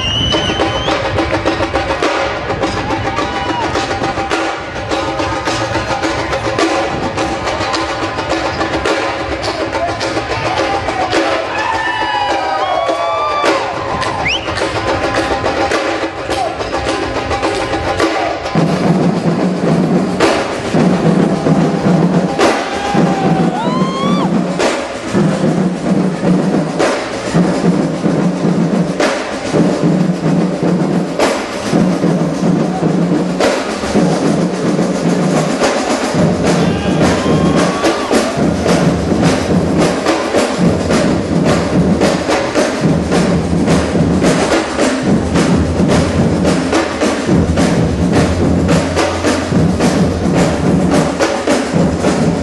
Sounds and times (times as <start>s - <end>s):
Bass drum: 0.0s - 52.4s
Drum kit: 0.0s - 52.4s.